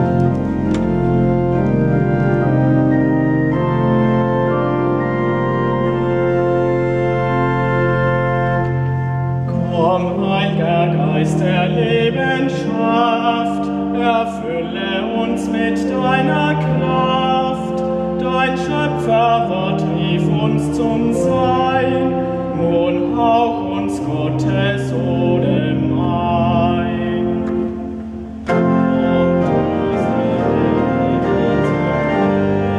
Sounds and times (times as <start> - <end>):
Piano: 0.0 - 32.7.